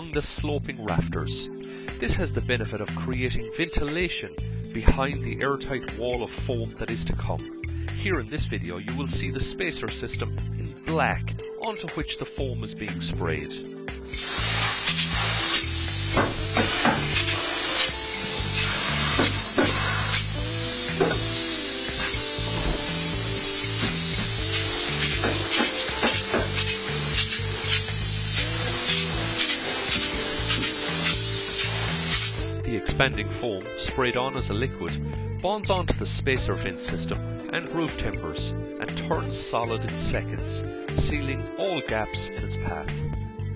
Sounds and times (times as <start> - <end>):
Music: 0.0 - 43.5
Spray: 14.0 - 32.5.